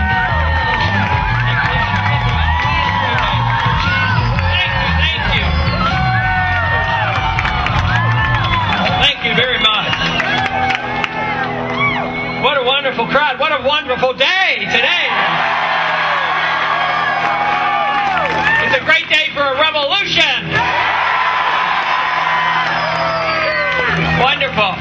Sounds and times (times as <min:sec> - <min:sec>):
Music: 0:00.0 - 0:24.8
Male speech, man speaking: 0:04.5 - 0:05.6, 0:09.0 - 0:10.0, 0:12.4 - 0:15.2, 0:18.6 - 0:20.5, 0:24.2 - 0:24.8.